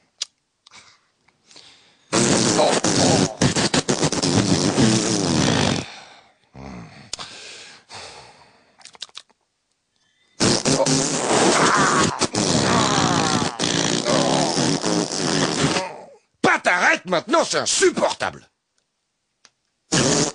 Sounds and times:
Fart: 2.1s - 5.9s, 10.4s - 16.0s, 19.9s - 20.3s.

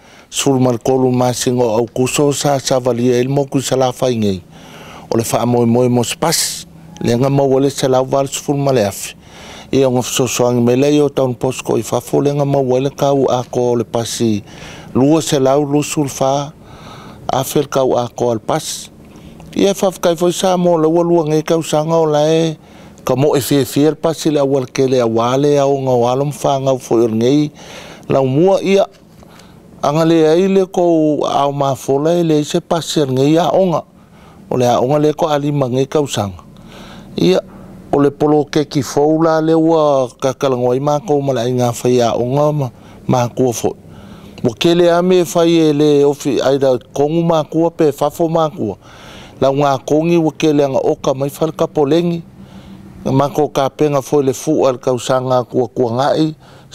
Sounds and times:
Speech: 0.3s - 4.5s, 5.1s - 16.6s, 17.3s - 18.9s, 19.5s - 27.5s, 28.1s - 29.0s, 29.8s - 33.9s, 34.5s - 36.4s, 37.2s - 43.8s, 44.4s - 48.8s, 49.4s - 52.2s, 53.0s - 56.7s.

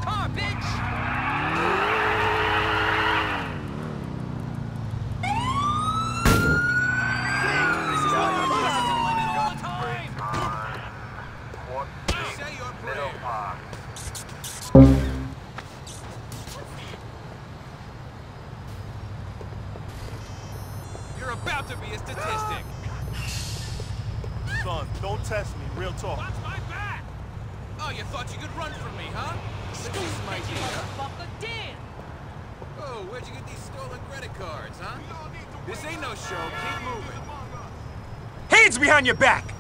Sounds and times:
Car passing by: 29.0s - 31.2s.

